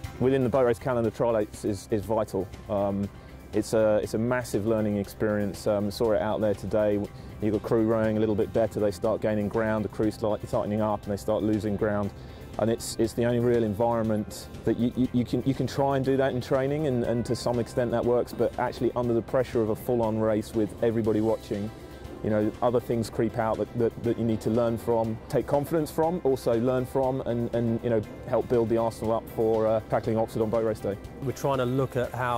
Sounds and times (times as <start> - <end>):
Music: 0.0 - 32.3
Speech: 0.2 - 32.3.